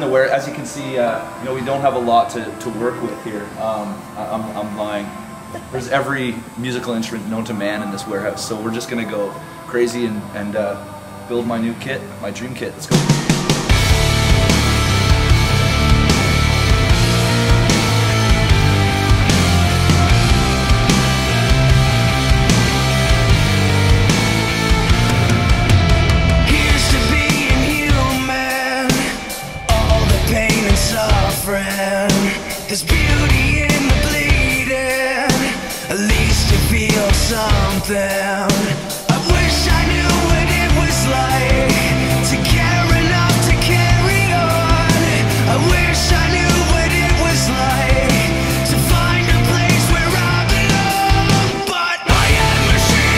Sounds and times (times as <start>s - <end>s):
Drum kit: 12.9s - 53.1s
Drum roll: 12.9s - 53.1s
Bass drum: 13.7s - 28.1s, 29.7s - 31.4s, 32.9s - 34.6s, 36.1s - 37.9s, 39.2s - 53.1s.